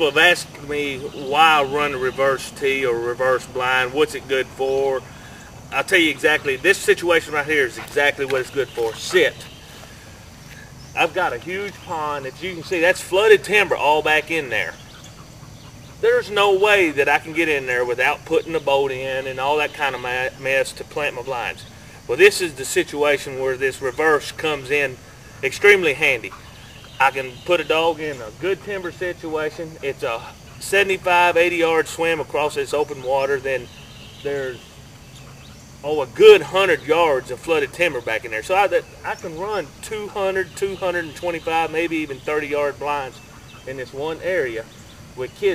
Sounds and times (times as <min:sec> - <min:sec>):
Speech: 0:00.0 - 0:05.1, 0:05.7 - 0:09.5, 0:11.0 - 0:14.8, 0:16.0 - 0:26.4, 0:27.0 - 0:33.7, 0:34.3 - 0:34.6, 0:35.8 - 0:45.5.